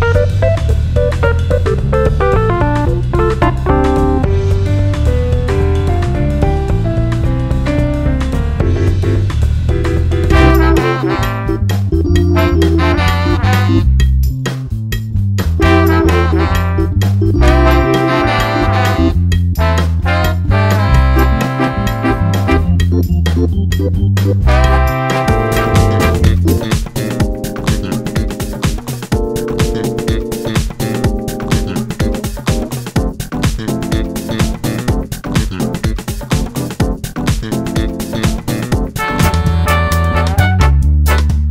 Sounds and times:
Background music: 0:00.0 - 0:41.5
Jazz: 0:00.0 - 0:41.5.

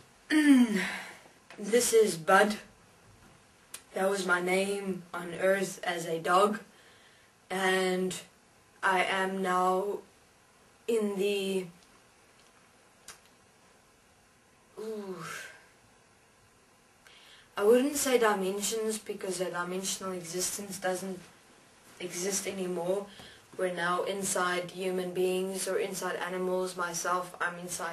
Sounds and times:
Speech: 0:01.6 - 0:02.7, 0:03.8 - 0:06.7, 0:07.5 - 0:10.1, 0:10.9 - 0:11.8, 0:14.8 - 0:15.6, 0:17.6 - 0:21.3, 0:22.0 - 0:27.9.

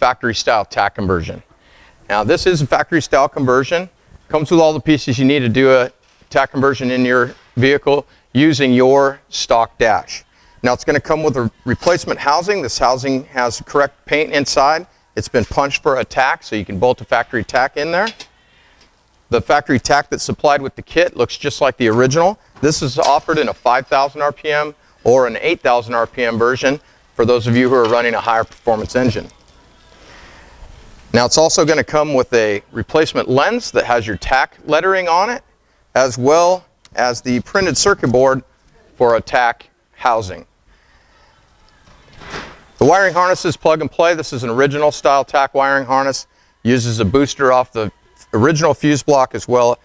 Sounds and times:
Speech: 0:00.0 - 0:01.5, 0:02.1 - 0:18.2, 0:19.3 - 0:29.4, 0:31.1 - 0:35.4, 0:36.0 - 0:40.5, 0:42.8 - 0:49.8.

